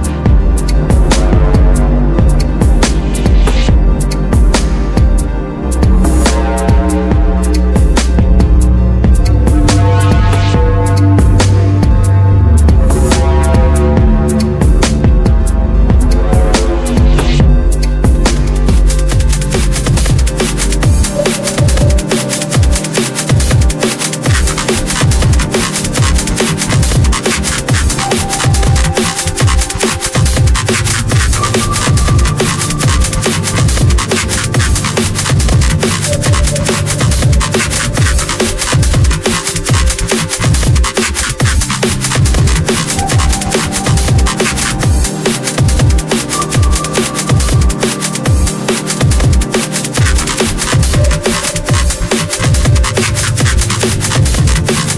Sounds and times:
Drum and bass: 0:00.0 - 0:54.9.

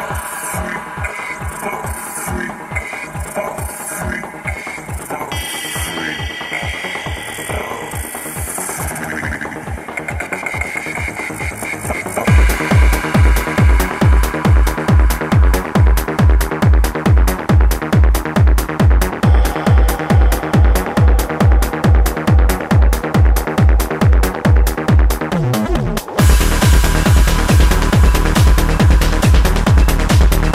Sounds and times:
Sound effect: 0:00.0 - 0:16.7
Music: 0:00.0 - 0:30.5.

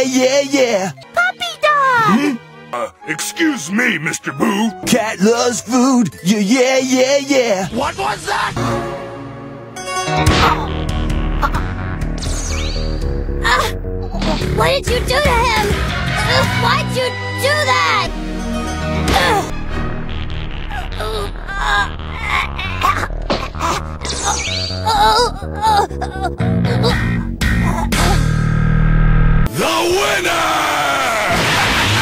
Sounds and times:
Music: 0:00.0 - 0:32.0.

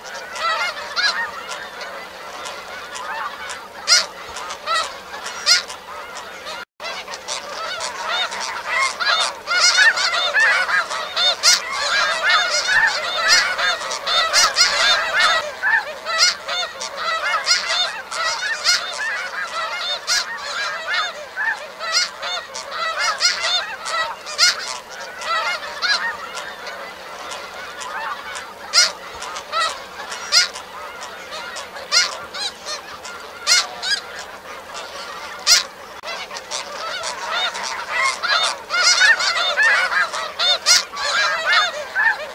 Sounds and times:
Honk: 0:00.0 - 0:42.3.

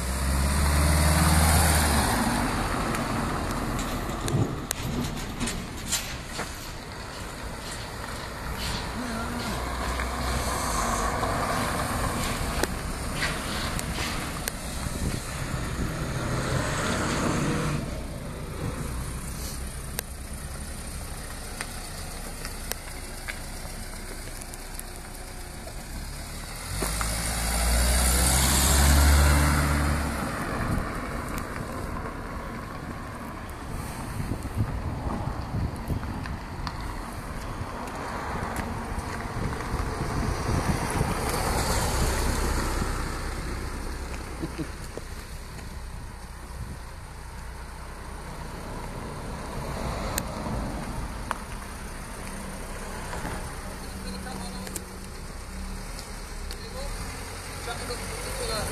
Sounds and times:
Car: 0:00.0 - 0:58.7
Truck: 0:00.0 - 0:58.7.

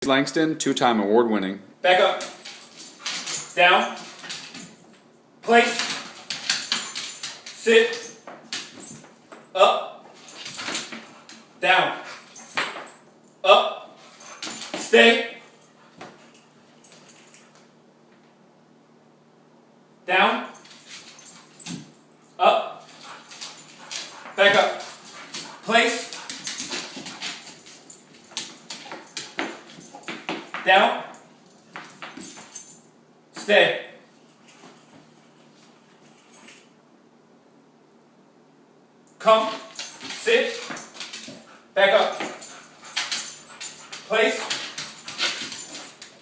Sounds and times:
Speech: 0:00.0 - 0:02.3, 0:11.6 - 0:12.0, 0:20.1 - 0:20.6, 0:33.4 - 0:34.0, 0:39.2 - 0:39.6, 0:41.8 - 0:42.2, 0:44.1 - 0:44.5.

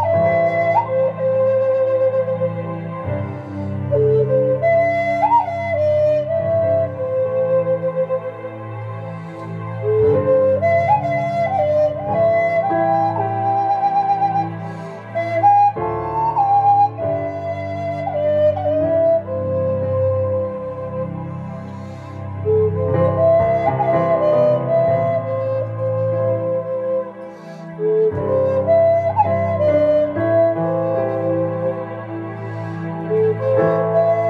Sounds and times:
Flute: 0:00.0 - 0:34.3.

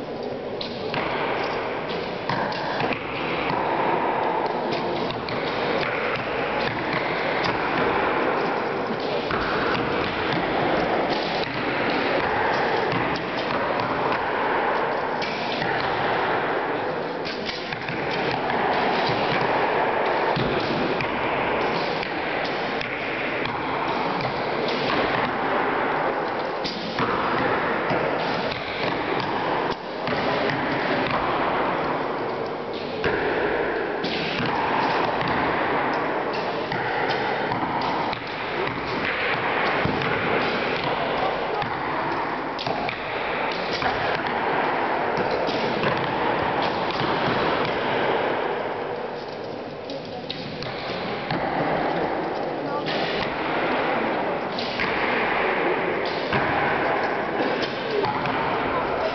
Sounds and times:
Arrow: 0:00.2 - 0:59.1.

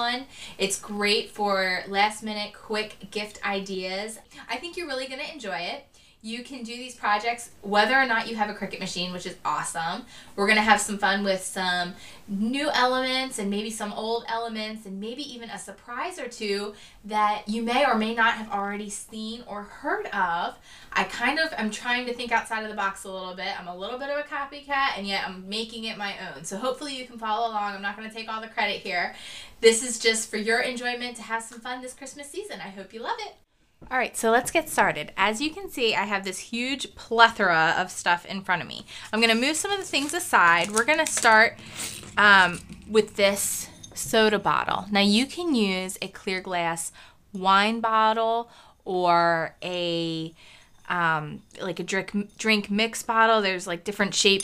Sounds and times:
Speech: 0:00.0 - 0:54.4.

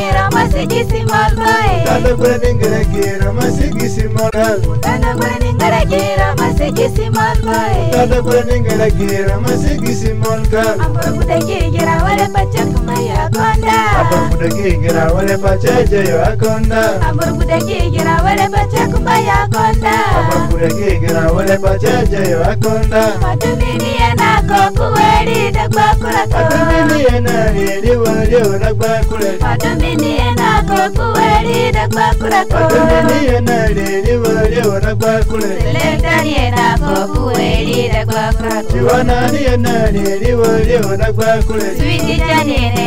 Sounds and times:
Soul music: 0:00.0 - 0:42.8.

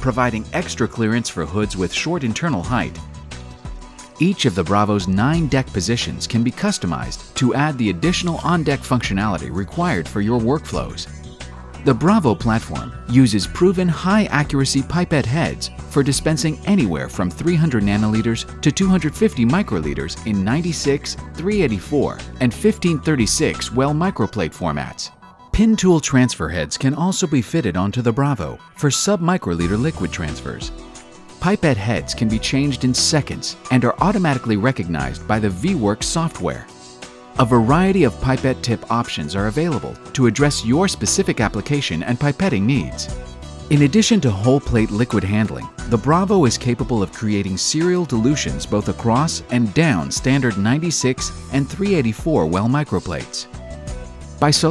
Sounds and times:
Speech: 0:00.0 - 0:03.0, 0:04.2 - 0:11.1, 0:11.8 - 0:30.7, 0:31.4 - 0:36.7, 0:37.4 - 0:53.5, 0:54.4 - 0:54.7
Music: 0:00.0 - 0:54.7.

